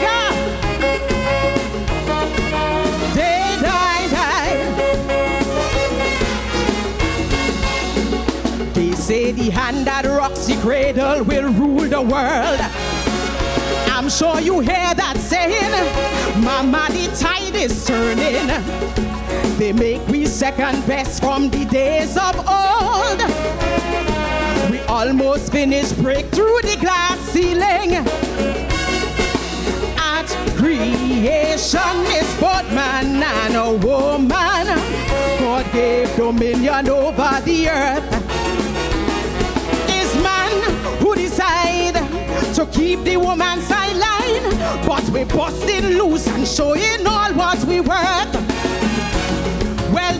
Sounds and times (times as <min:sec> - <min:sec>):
Music: 0:00.0 - 0:50.1
Female singing: 0:02.9 - 0:04.9, 0:08.8 - 0:12.8, 0:13.9 - 0:18.7, 0:19.5 - 0:23.5, 0:24.3 - 0:28.1, 0:30.0 - 0:38.2, 0:39.9 - 0:48.4, 0:49.9 - 0:50.1.